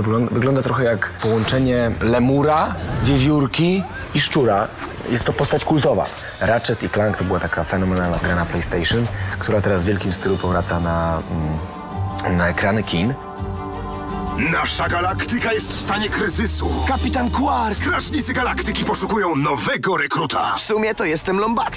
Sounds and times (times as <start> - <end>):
Music: 0.0 - 21.7
Speech: 14.4 - 21.7.